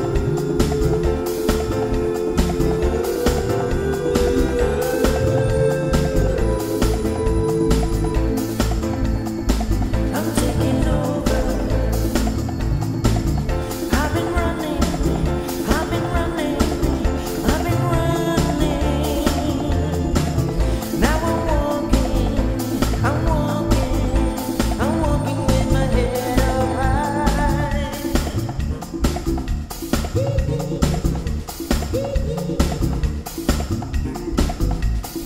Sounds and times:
Gospel music: 0.0s - 35.2s.

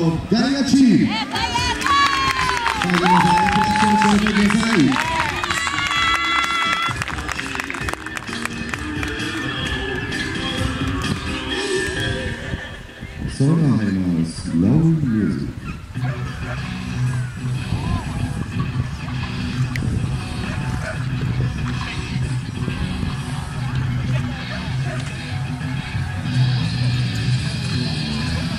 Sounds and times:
Music: 1.1s - 28.5s.

